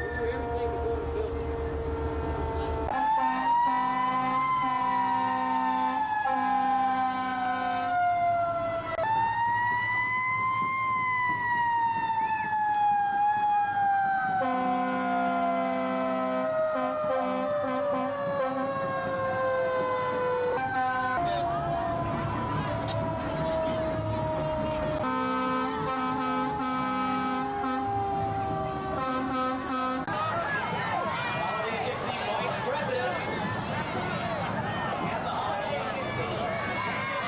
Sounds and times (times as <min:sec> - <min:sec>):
Fire engine, fire truck (siren): 0:00.0 - 0:32.9.